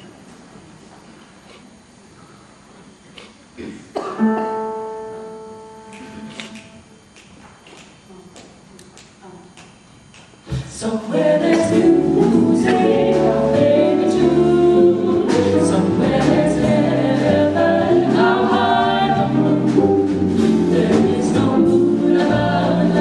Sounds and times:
Music: 4.2 - 6.9, 10.6 - 23.0
Singing: 10.6 - 19.8.

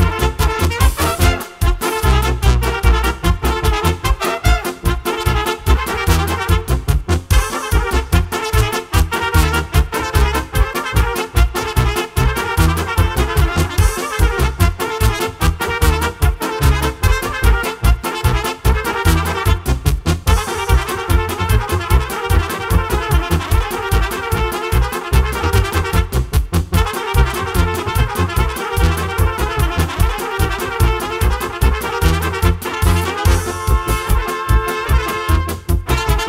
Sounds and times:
Trumpet: 0.0 - 36.2.

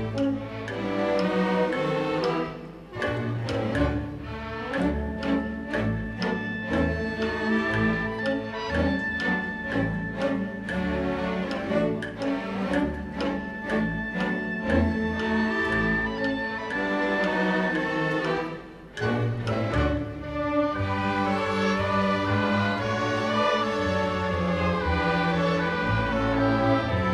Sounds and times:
Music: 0.0 - 27.1.

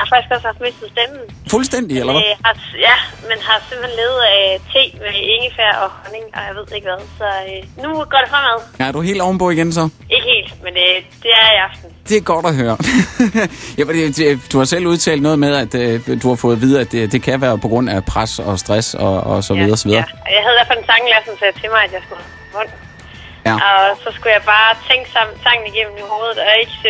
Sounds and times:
Music: 0.0 - 26.8
Speech: 1.5 - 2.8, 13.8 - 20.6, 23.5 - 25.2.

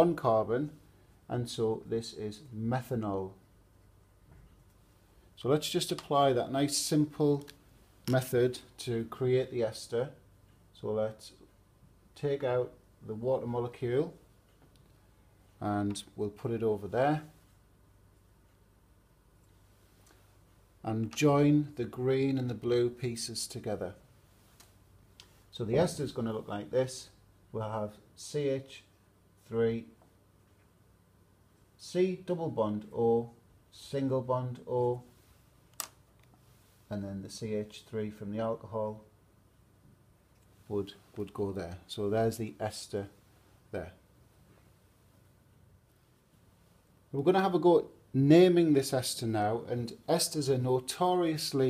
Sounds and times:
Speech: 0.0 - 3.4, 5.4 - 11.5, 12.2 - 14.2, 15.6 - 17.4, 20.8 - 24.0, 25.5 - 30.0, 31.8 - 35.1, 36.9 - 39.1, 40.7 - 44.0, 47.1 - 51.7.

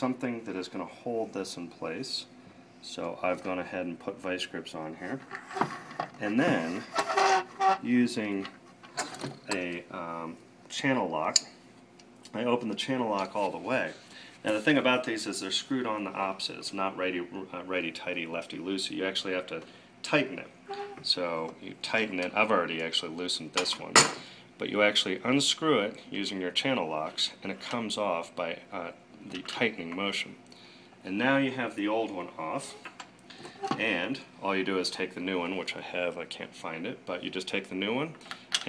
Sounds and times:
Speech: 0.0 - 5.3, 6.2 - 7.0, 7.8 - 8.5, 9.5 - 11.5, 12.3 - 30.4, 31.0 - 32.8, 33.7 - 38.6.

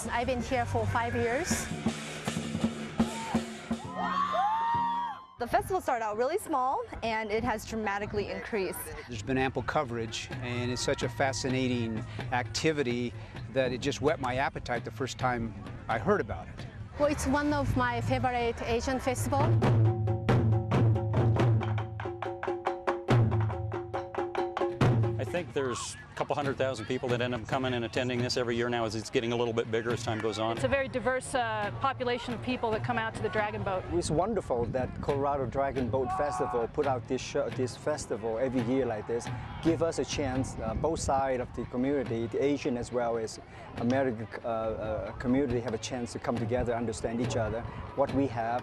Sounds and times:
Music: 0.0 - 48.6.

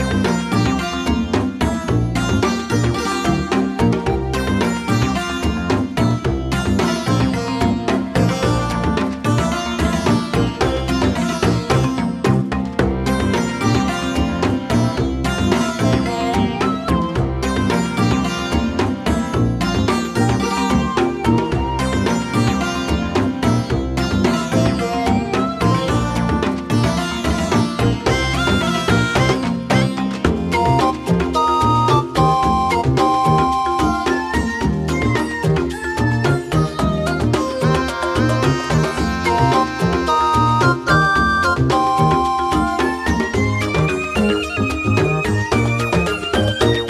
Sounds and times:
Music: 0.0 - 46.8.

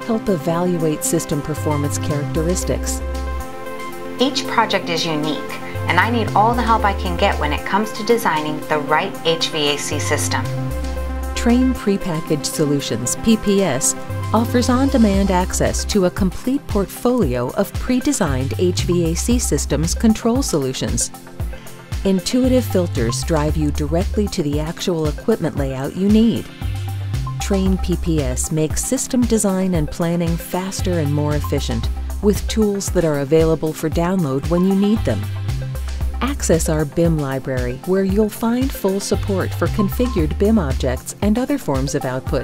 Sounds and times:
Speech: 0.0 - 3.0, 4.2 - 10.5, 11.4 - 21.1, 22.1 - 26.5, 27.4 - 35.3, 36.2 - 42.4
Music: 0.0 - 42.4.

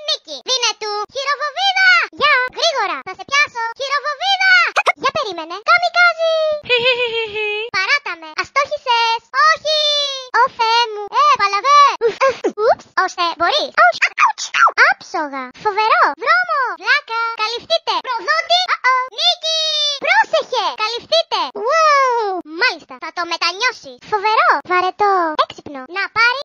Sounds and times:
Child speech, kid speaking: 0.0 - 6.6, 7.6 - 26.4.

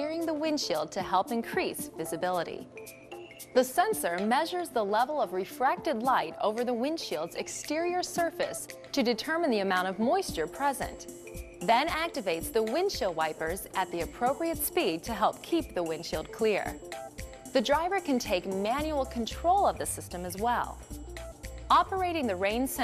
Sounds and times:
Speech: 0.0 - 2.6, 3.6 - 11.0, 11.6 - 16.8, 17.6 - 20.8, 21.7 - 22.8
Music: 0.0 - 22.8.

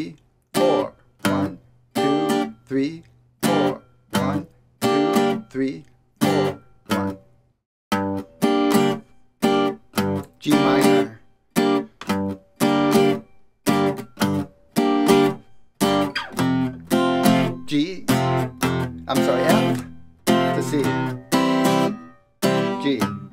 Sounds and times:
Speech: 0.0 - 5.9, 10.4 - 11.2, 17.5 - 18.2, 19.1 - 19.8, 20.4 - 21.0, 22.7 - 23.3
Music: 0.5 - 23.3.

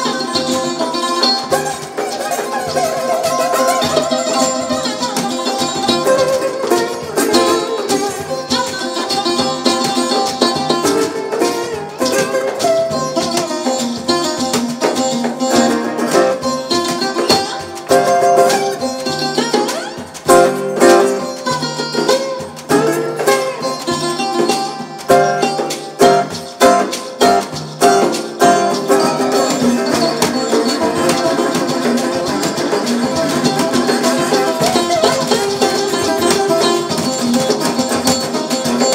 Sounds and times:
Acoustic guitar: 0.0 - 38.9
Strum: 0.0 - 38.9.

